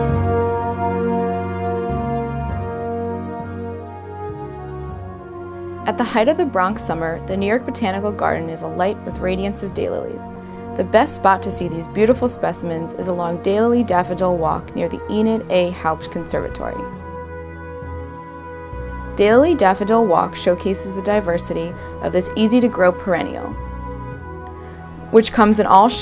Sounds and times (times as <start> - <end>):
Music: 0.0 - 26.0
Speech: 5.9 - 16.9, 19.2 - 23.5, 25.2 - 26.0.